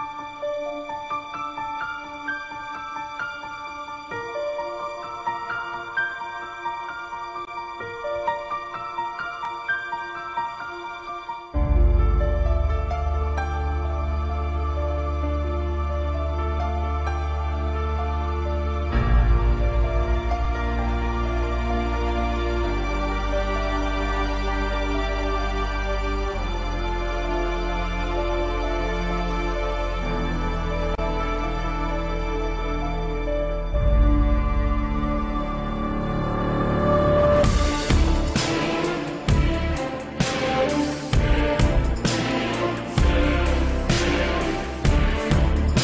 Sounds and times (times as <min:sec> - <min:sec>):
Background music: 0:00.0 - 0:45.8
New-age music: 0:00.0 - 0:45.8
Theme music: 0:00.0 - 0:45.8.